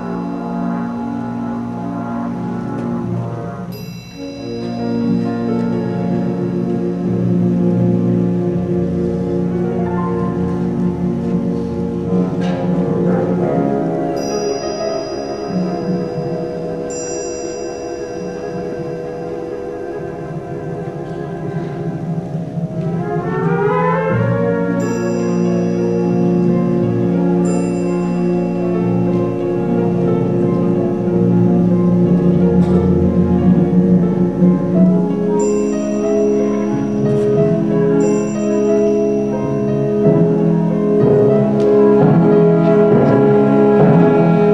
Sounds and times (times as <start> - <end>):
Music: 0.0 - 44.5.